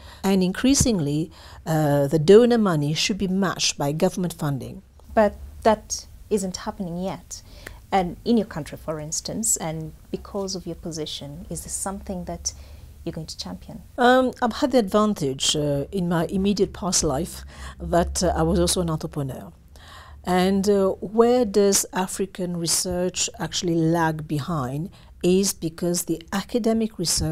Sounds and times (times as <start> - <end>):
Speech: 0.3 - 19.6, 20.3 - 27.3.